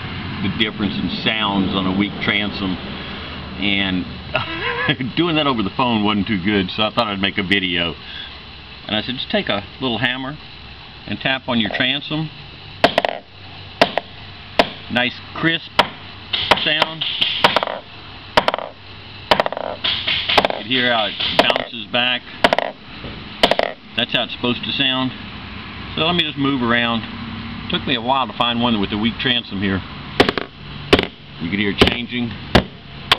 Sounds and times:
Speech: 0.4s - 2.8s, 3.6s - 4.1s, 4.9s - 8.0s, 8.9s - 10.4s, 11.0s - 12.4s, 14.9s - 15.8s, 16.5s - 17.0s, 20.6s - 22.2s, 24.0s - 25.2s, 25.9s - 27.1s, 27.7s - 29.9s, 31.4s - 32.4s.

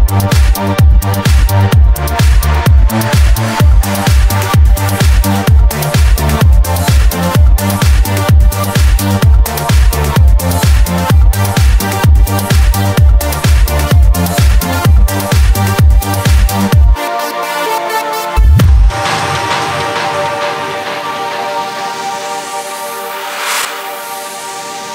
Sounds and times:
Dance music: 0.0s - 24.9s.

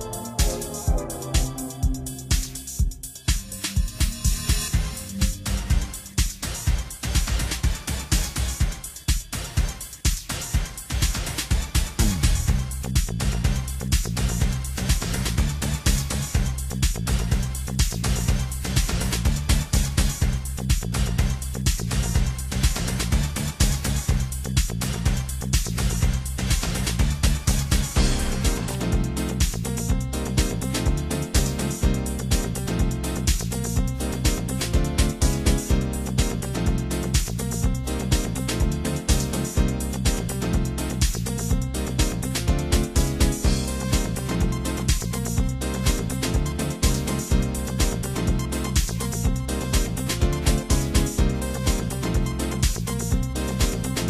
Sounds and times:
Music: 0.0s - 54.0s.

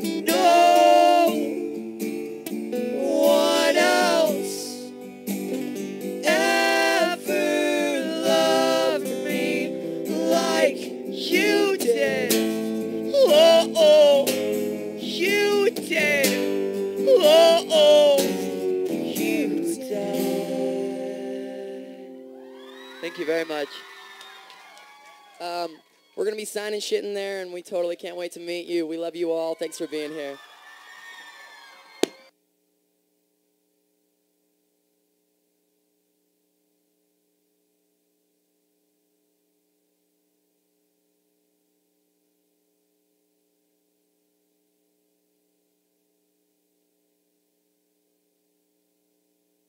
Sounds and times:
Crowd: 22.4s - 26.2s, 29.5s - 32.3s.

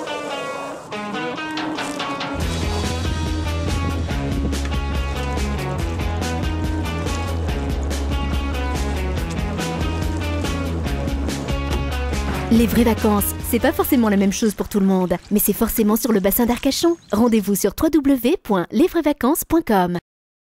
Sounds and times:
Music: 0.0s - 17.7s
Speech: 12.5s - 20.1s.

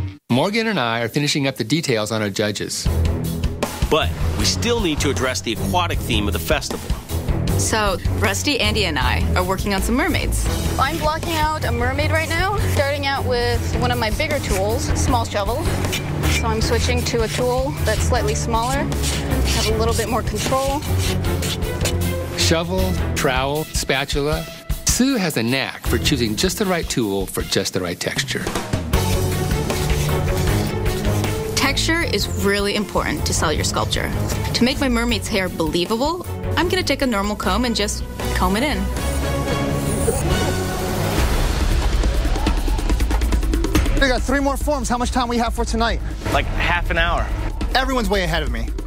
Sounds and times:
Music: 0.0s - 0.3s, 2.2s - 48.8s
Speech: 0.3s - 2.9s, 22.4s - 28.5s.

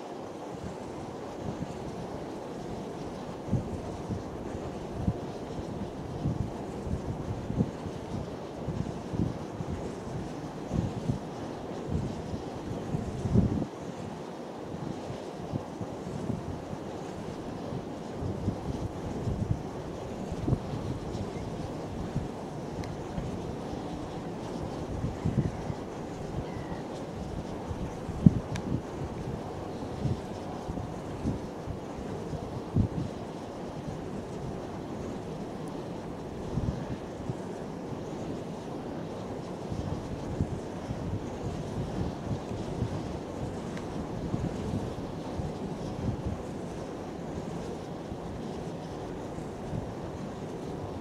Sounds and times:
Ocean: 0.0s - 51.0s
Outside, rural or natural: 0.0s - 51.0s.

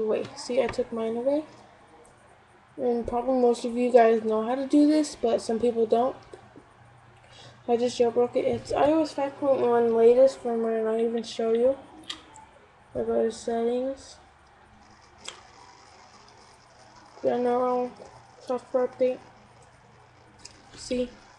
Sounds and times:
Speech: 0.0s - 1.6s, 2.8s - 6.2s, 7.7s - 11.9s, 13.0s - 14.2s, 17.2s - 19.3s, 20.8s - 21.2s.

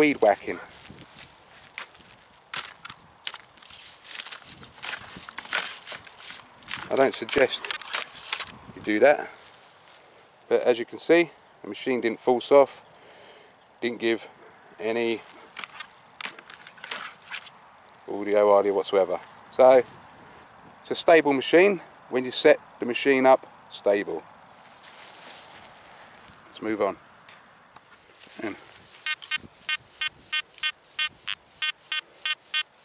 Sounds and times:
Speech: 0.0s - 0.7s, 6.9s - 7.7s, 8.8s - 9.4s, 10.5s - 12.8s, 13.8s - 15.3s, 18.1s - 19.9s, 20.8s - 24.2s, 26.5s - 27.0s, 28.4s - 28.6s.

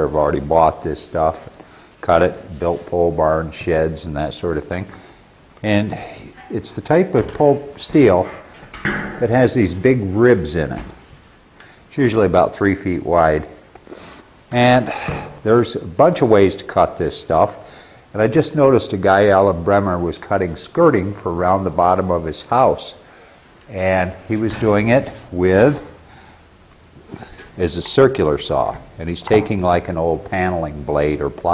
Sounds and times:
Speech: 0.0s - 5.0s, 5.6s - 8.5s, 9.2s - 11.0s, 11.9s - 13.6s, 14.5s - 23.0s, 23.7s - 26.0s, 27.2s - 31.5s.

